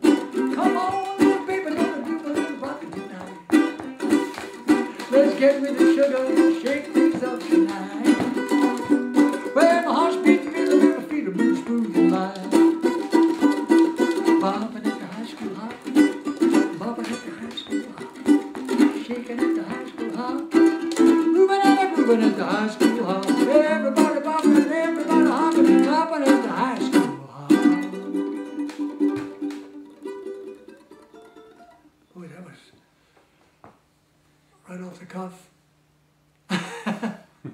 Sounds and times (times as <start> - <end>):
Country: 0.0 - 31.8
Ukulele: 0.0 - 32.0
Speech: 32.1 - 32.8, 34.6 - 35.6.